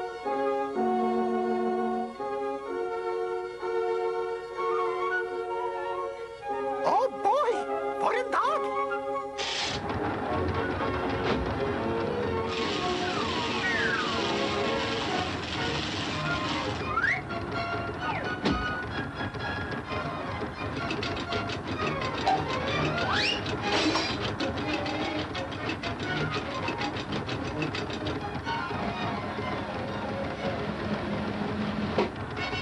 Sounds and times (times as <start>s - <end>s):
Music: 0.0s - 32.6s
Speech: 6.8s - 8.8s.